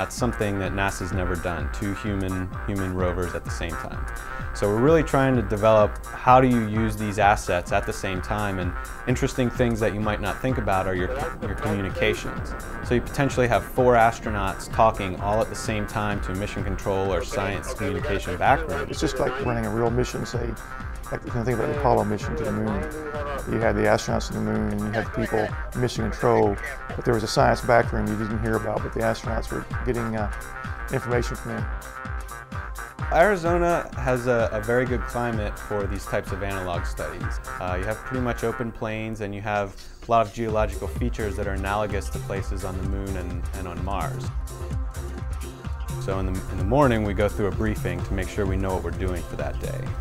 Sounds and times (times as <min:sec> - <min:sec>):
Speech: 0:00.0 - 0:04.0, 0:04.6 - 0:31.7, 0:33.1 - 0:44.3, 0:46.0 - 0:49.9
Music: 0:00.0 - 0:50.0.